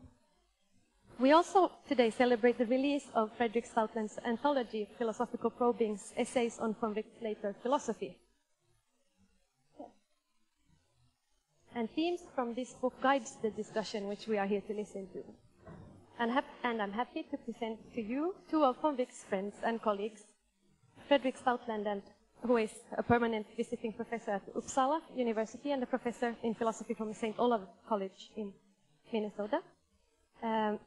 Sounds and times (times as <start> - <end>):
Female speech, woman speaking: 1.2 - 8.2, 11.8 - 15.4, 16.2 - 20.3, 21.1 - 29.6, 30.4 - 30.8.